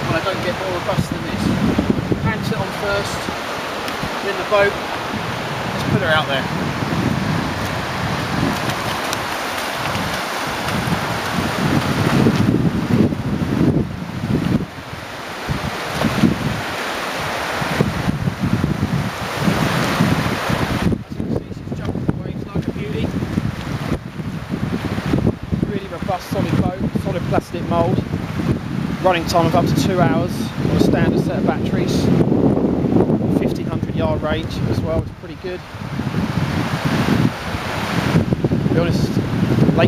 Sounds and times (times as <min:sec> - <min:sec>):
Speech: 0:00.0 - 0:01.6, 0:02.2 - 0:03.3, 0:04.2 - 0:04.8, 0:05.8 - 0:06.5, 0:21.0 - 0:23.1, 0:25.7 - 0:28.0, 0:29.0 - 0:32.2, 0:33.3 - 0:35.6, 0:38.8 - 0:39.2.